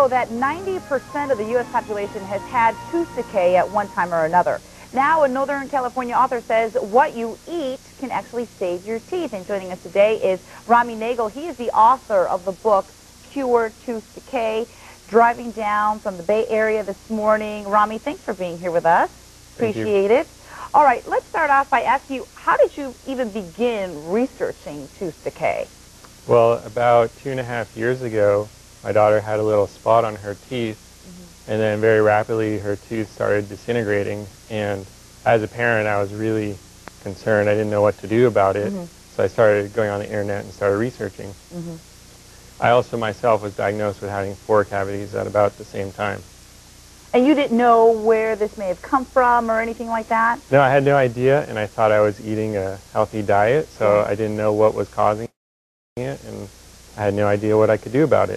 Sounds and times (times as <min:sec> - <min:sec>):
Speech: 0:00.0 - 0:25.7, 0:26.3 - 0:41.8, 0:42.6 - 0:46.2, 0:47.2 - 0:55.4, 0:56.0 - 0:58.3.